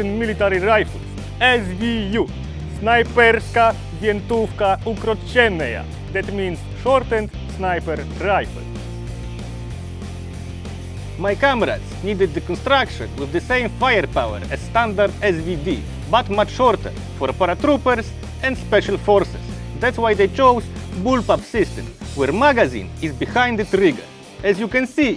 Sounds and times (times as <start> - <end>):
Speech: 0.0 - 8.6, 11.2 - 25.1
Music: 0.0 - 25.1.